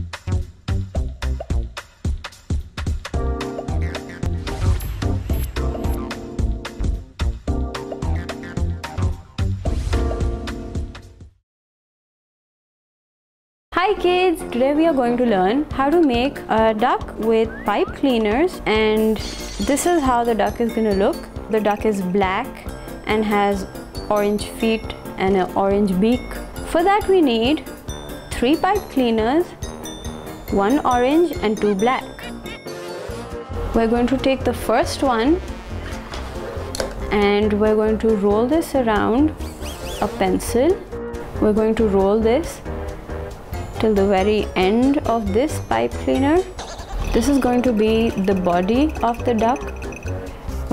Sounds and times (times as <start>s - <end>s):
Music: 0.0s - 11.4s, 13.7s - 50.7s
Speech: 13.8s - 22.5s, 23.1s - 27.6s, 28.4s - 29.5s, 30.5s - 32.1s, 33.8s - 35.4s, 37.1s - 39.3s, 40.0s - 40.8s, 41.4s - 42.6s, 43.8s - 46.5s, 47.1s - 49.6s.